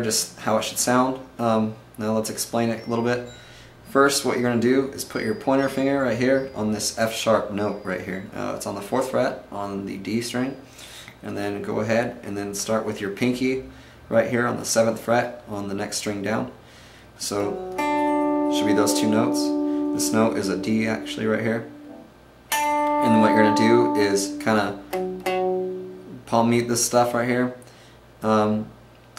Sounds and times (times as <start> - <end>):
Speech: 0.0 - 3.3, 3.9 - 10.6, 11.2 - 16.6, 17.2 - 17.6, 18.5 - 21.7, 23.0 - 24.8, 26.1 - 27.6, 28.2 - 29.1.